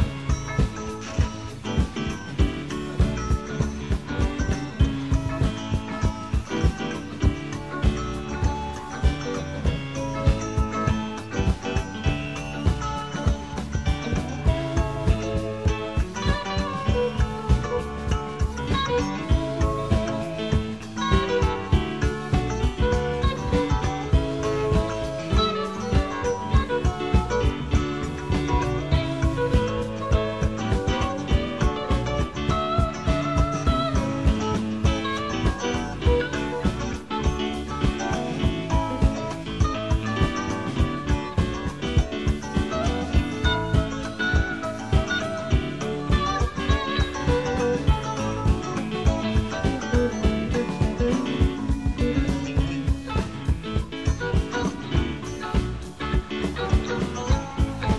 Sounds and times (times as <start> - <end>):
Music: 0.0 - 57.9.